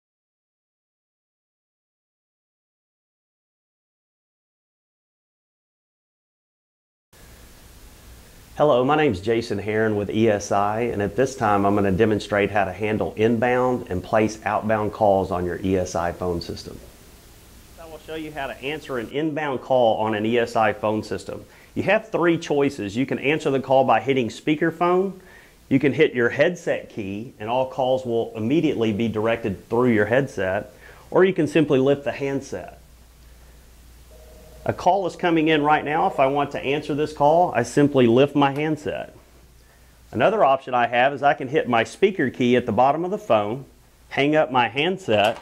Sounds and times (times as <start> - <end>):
Speech: 8.6 - 16.9, 17.8 - 32.8, 34.7 - 39.2, 40.1 - 45.4.